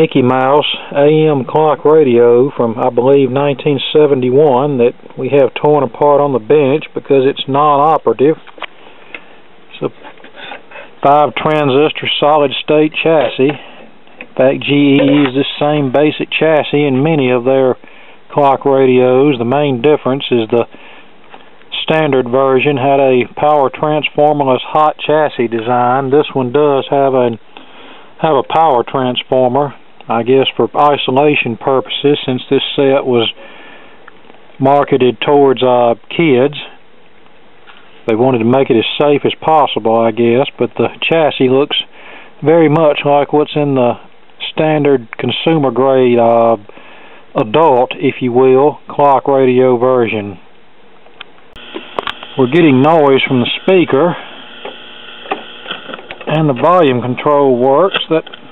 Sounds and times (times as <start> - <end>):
Speech: 0.0 - 8.5, 9.7 - 20.7, 21.7 - 27.4, 28.2 - 33.4, 34.6 - 36.8, 38.1 - 46.7, 47.3 - 50.4, 52.4 - 54.3, 56.2 - 58.4.